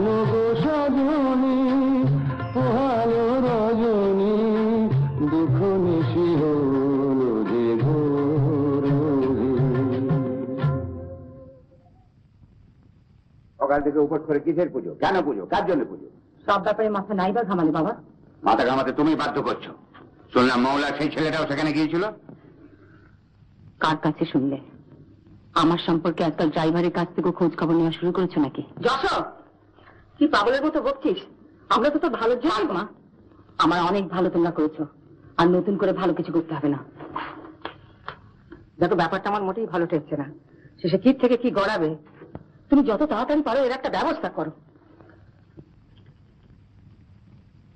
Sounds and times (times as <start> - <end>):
Inside, small room: 0.0 - 47.7
Speech: 13.6 - 22.2.